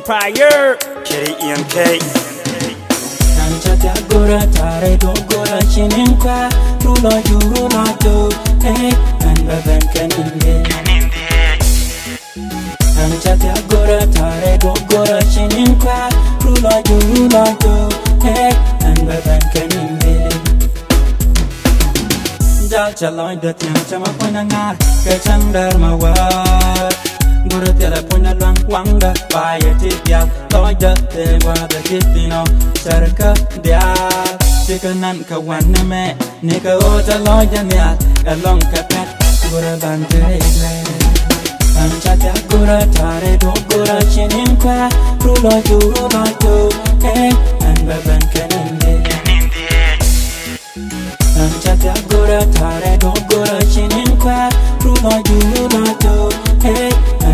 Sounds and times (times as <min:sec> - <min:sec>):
Music: 0:00.0 - 0:57.3.